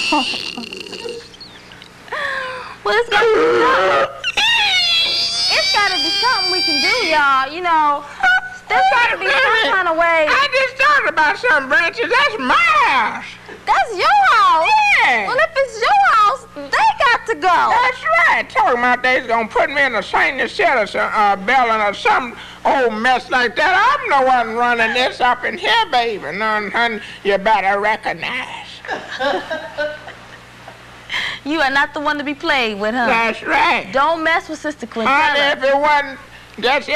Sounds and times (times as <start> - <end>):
Inside, small room: 0.0 - 36.9.